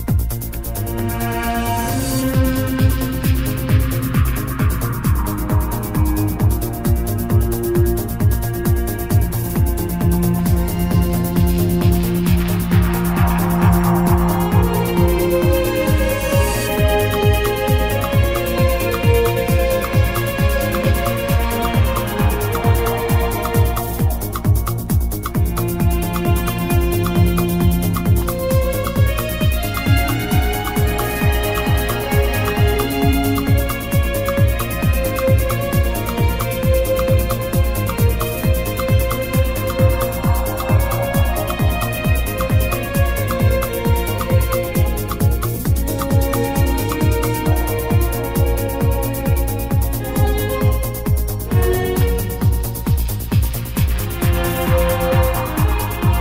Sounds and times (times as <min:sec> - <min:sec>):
Trance music: 0:00.0 - 0:56.2.